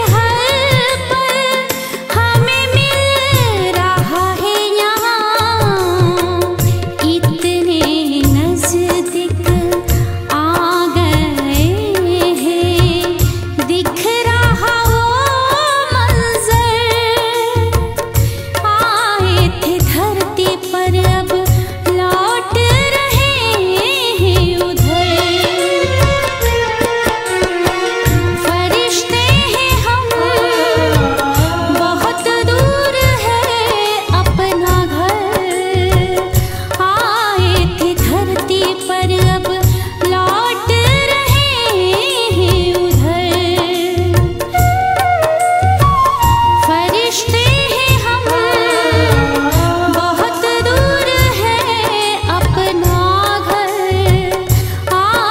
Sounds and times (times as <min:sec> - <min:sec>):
Music of Bollywood: 0:00.0 - 0:55.3.